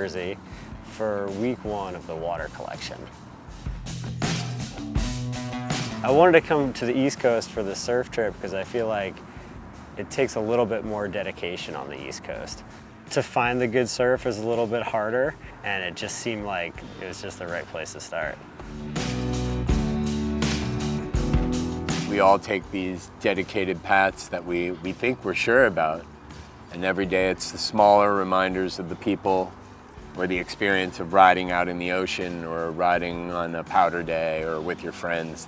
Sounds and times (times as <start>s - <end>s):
Speech: 0.0s - 3.1s, 6.0s - 9.2s, 10.0s - 18.4s, 22.0s - 26.0s, 26.7s - 29.5s, 30.2s - 35.4s
Music: 0.0s - 35.4s.